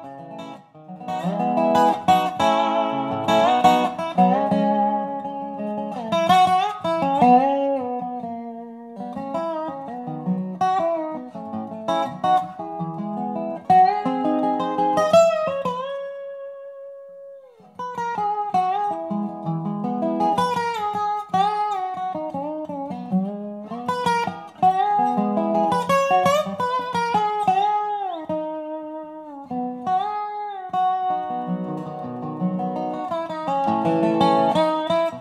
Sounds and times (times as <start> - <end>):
Acoustic guitar: 0.0 - 35.2.